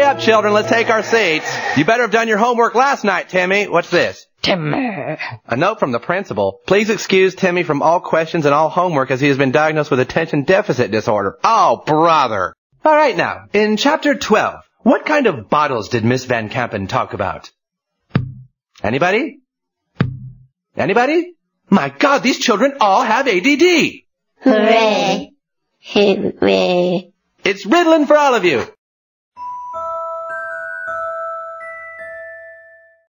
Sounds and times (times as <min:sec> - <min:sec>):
Music: 0:00.0 - 0:01.9, 0:29.4 - 0:33.1
Speech: 0:00.0 - 0:17.5, 0:18.8 - 0:19.4, 0:20.8 - 0:25.3, 0:25.9 - 0:28.8.